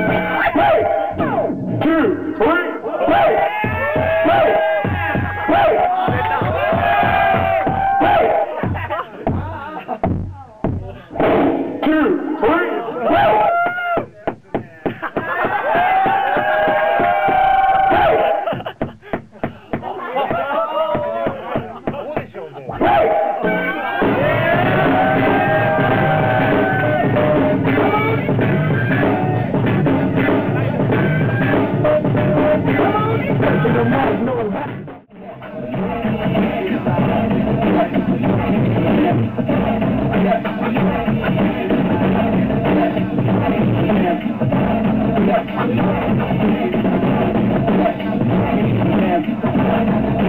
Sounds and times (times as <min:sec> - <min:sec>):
Percussion: 0:00.0 - 0:50.2.